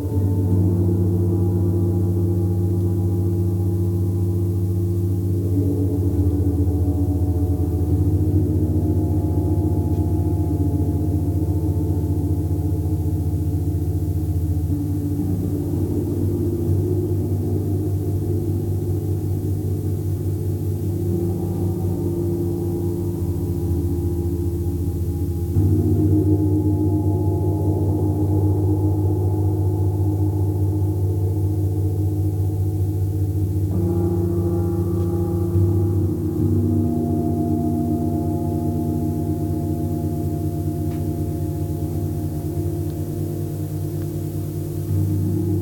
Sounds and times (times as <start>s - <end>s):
Gong: 0.0s - 45.6s.